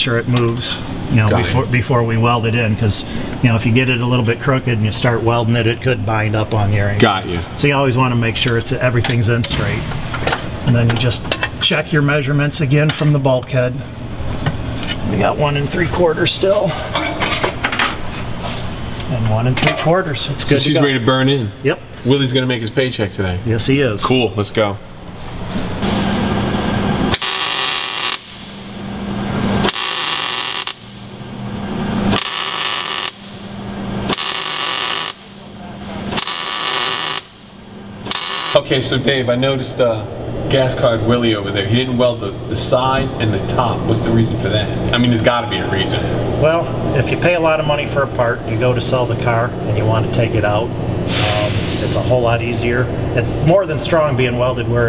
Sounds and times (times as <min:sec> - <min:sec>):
Speech: 0:00.0 - 0:09.9, 0:10.6 - 0:13.8, 0:15.0 - 0:16.8, 0:19.1 - 0:24.8, 0:38.6 - 0:54.8.